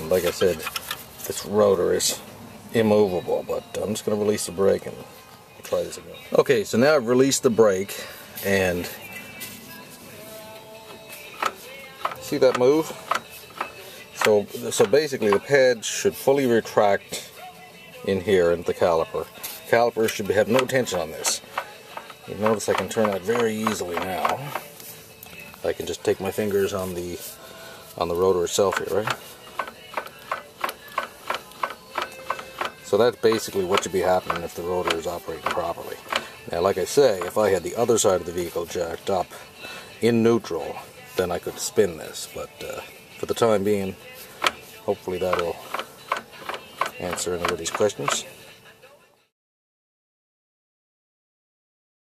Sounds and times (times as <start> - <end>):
Speech: 0.0 - 0.7, 1.3 - 5.1, 5.7 - 9.0, 12.2 - 13.0, 14.2 - 17.3, 18.1 - 21.4, 22.3 - 24.6, 25.6 - 27.3, 28.0 - 29.2, 32.9 - 39.4, 40.0 - 44.0, 44.9 - 45.7, 46.9 - 48.3
Music: 0.0 - 49.4.